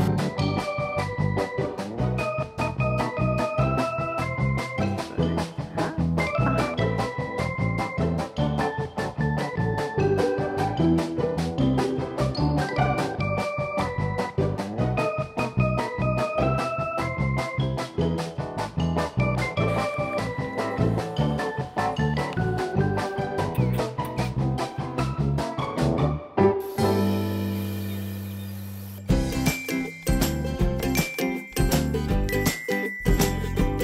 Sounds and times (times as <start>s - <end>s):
Music: 0.0s - 33.8s.